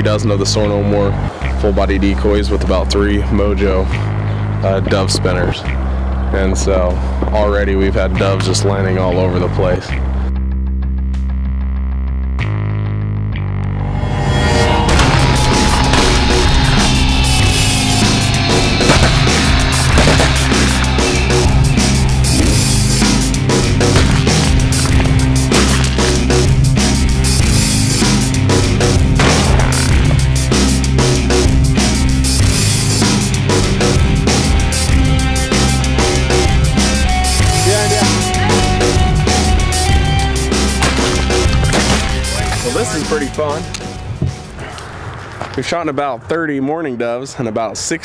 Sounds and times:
Music: 0.0 - 44.9.

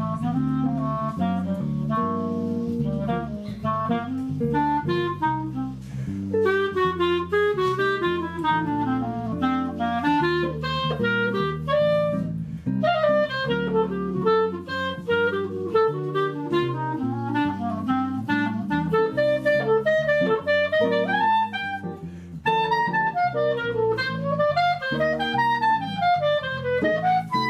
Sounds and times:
Clarinet: 0.0 - 27.5
Guitar: 0.0 - 27.5
Jazz: 0.0 - 27.5.

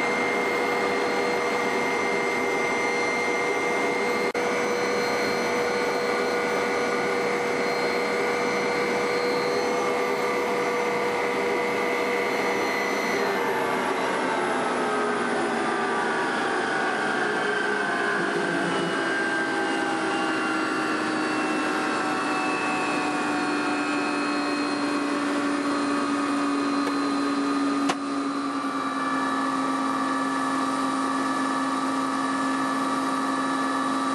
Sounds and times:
Aircraft: 0.0 - 34.1.

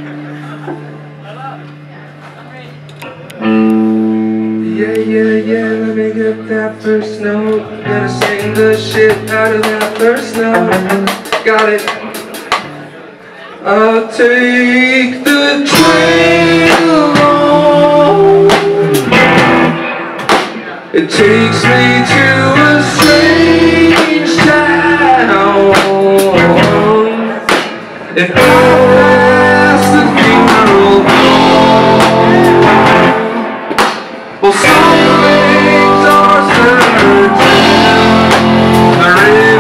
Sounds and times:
Speech: 0.0 - 3.5
Music: 2.8 - 39.6.

